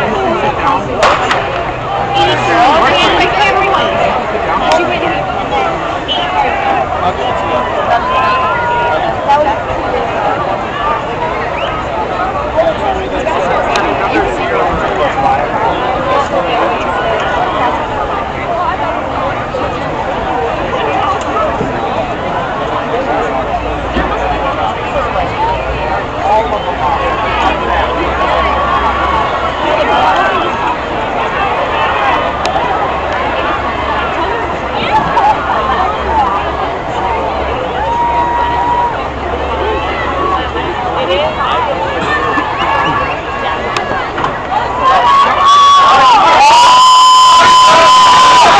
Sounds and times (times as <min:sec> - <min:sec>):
Speech: 0:00.0 - 0:48.5.